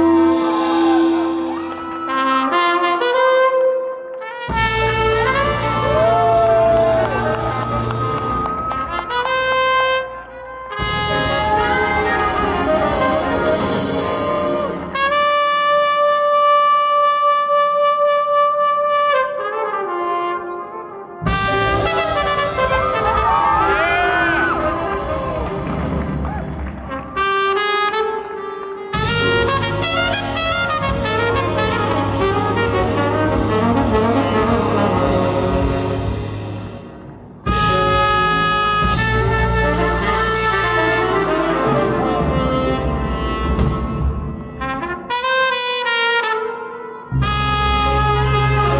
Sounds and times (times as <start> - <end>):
Clarinet: 0.0 - 36.9, 37.5 - 48.8.